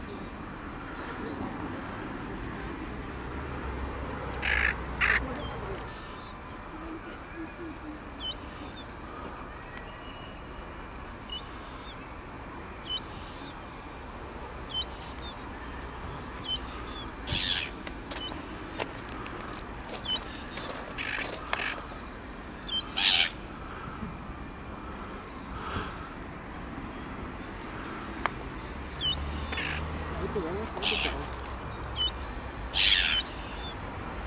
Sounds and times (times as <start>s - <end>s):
Caw: 4.4s - 5.2s, 21.0s - 21.9s, 29.5s - 29.8s
Speech: 30.1s - 31.4s.